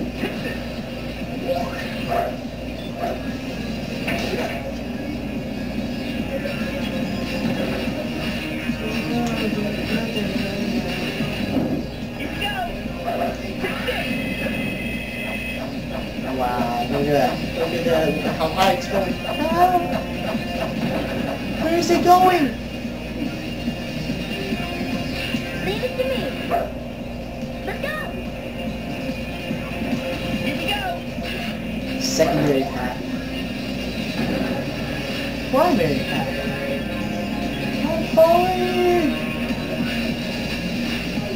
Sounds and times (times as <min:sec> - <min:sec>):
Music: 0:00.0 - 0:41.3.